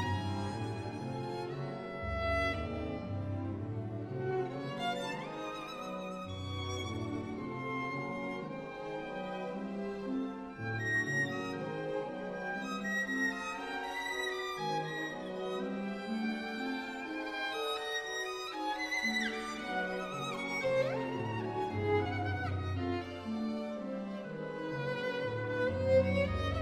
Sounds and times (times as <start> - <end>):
Violin, fiddle: 0.0 - 26.6.